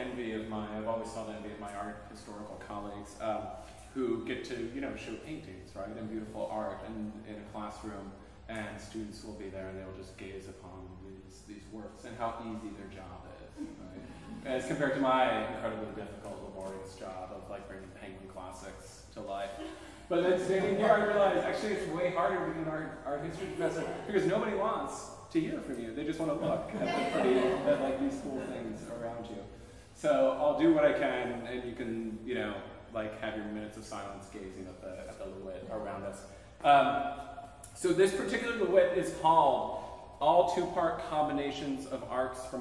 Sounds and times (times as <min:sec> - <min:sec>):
Speech: 0:00.0 - 0:37.0, 0:37.7 - 0:42.6.